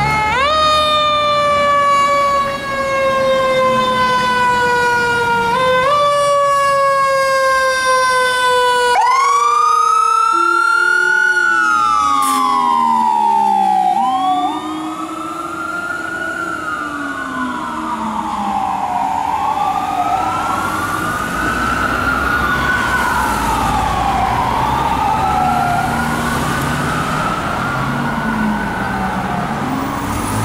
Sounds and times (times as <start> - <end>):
Fire engine, fire truck (siren): 0.0 - 30.4.